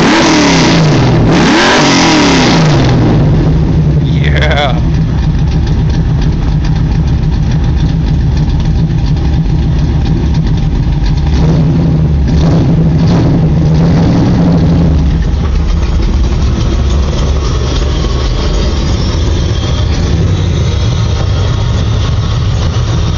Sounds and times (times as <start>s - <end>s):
Accelerating, revving, vroom: 0.0s - 3.4s, 11.3s - 15.1s
Car: 0.0s - 23.1s.